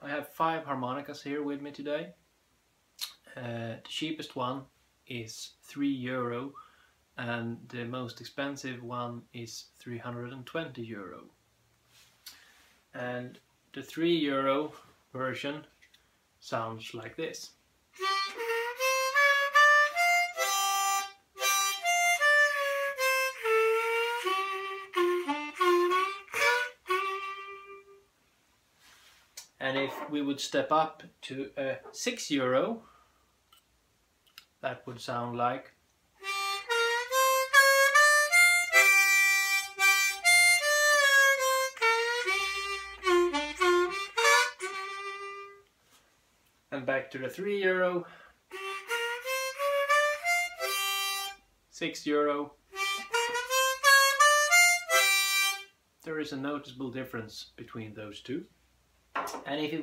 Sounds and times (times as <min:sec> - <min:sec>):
Speech: 0:00.0 - 0:02.2, 0:03.3 - 0:06.6, 0:07.2 - 0:11.3, 0:13.0 - 0:15.7, 0:16.4 - 0:17.6, 0:29.6 - 0:32.9, 0:34.6 - 0:35.8, 0:46.7 - 0:48.1, 0:51.7 - 0:52.6, 0:56.1 - 0:58.5, 0:59.4 - 0:59.8
Music: 0:18.0 - 0:28.1, 0:36.2 - 0:45.6, 0:48.5 - 0:51.4, 0:52.8 - 0:55.7.